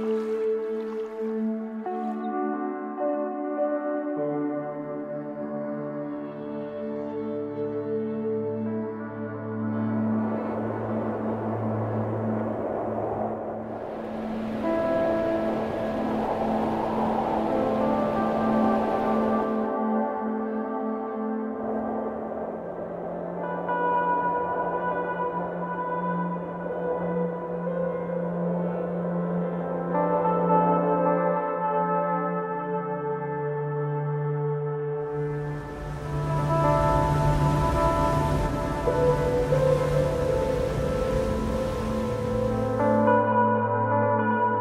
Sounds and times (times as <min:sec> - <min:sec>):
Music: 0:00.0 - 0:44.6.